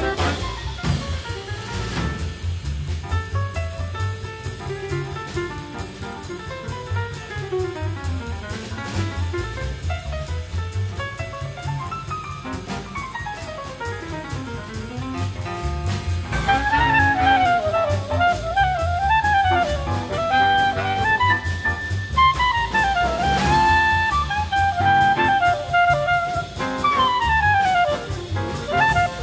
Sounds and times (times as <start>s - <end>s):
Classical music: 0.0s - 0.8s, 3.8s - 29.2s
Jazz: 0.0s - 29.2s
Orchestra: 0.0s - 29.2s.